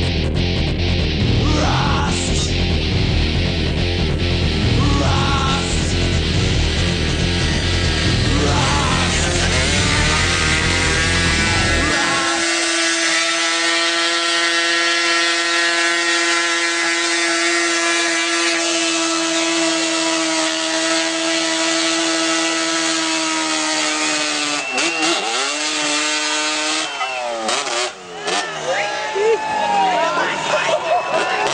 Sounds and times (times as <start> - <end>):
Motorcycle: 0.0 - 31.5.